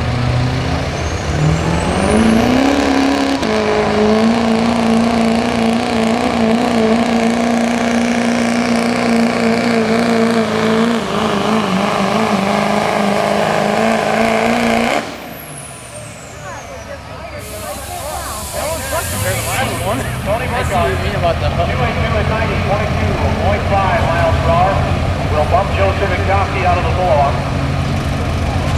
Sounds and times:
Truck: 0.0 - 28.7
Speech: 16.4 - 27.5.

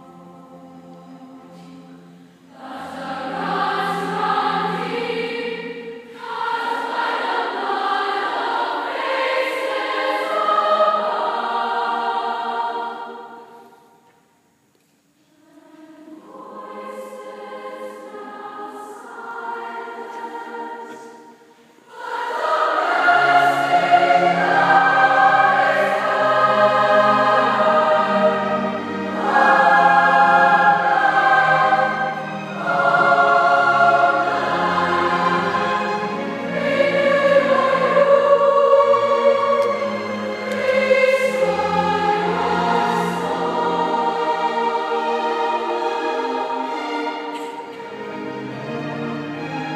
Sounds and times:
Choir: 0.0 - 14.2, 15.2 - 49.7.

